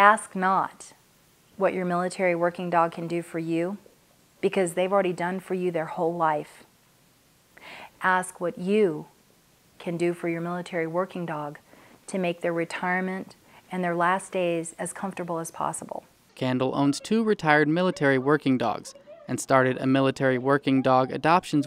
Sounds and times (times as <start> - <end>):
Speech: 1.6 - 3.8, 8.0 - 9.1, 9.8 - 21.6.